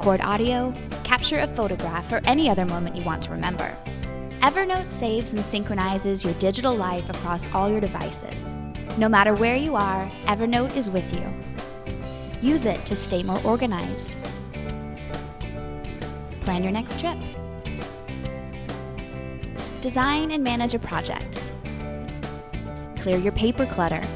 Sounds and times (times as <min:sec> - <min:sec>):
Speech: 0:00.0 - 0:03.8, 0:04.4 - 0:08.4, 0:12.4 - 0:14.1, 0:16.4 - 0:17.3, 0:19.8 - 0:21.3, 0:23.0 - 0:24.1
Music: 0:00.0 - 0:24.1.